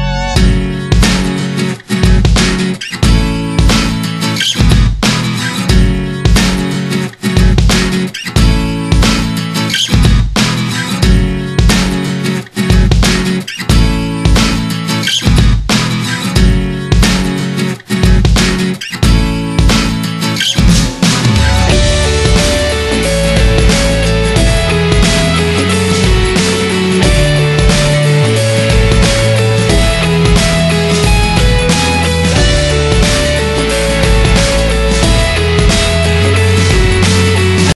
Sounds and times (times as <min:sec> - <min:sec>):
Music: 0:00.0 - 0:37.7.